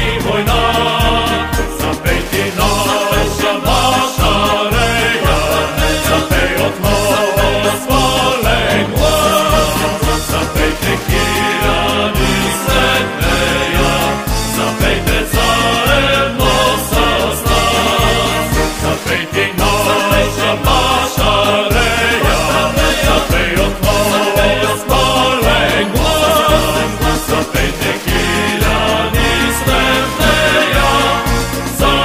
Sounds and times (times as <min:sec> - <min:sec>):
Music: 0:00.0 - 0:32.0.